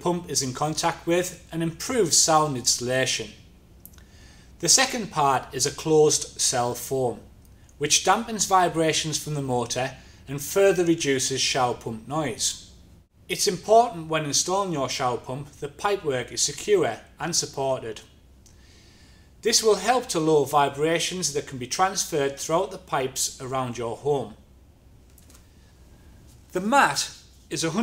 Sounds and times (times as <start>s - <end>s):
Speech: 0.0s - 3.4s, 4.6s - 12.7s, 13.3s - 18.2s, 19.4s - 24.4s, 26.5s - 27.8s.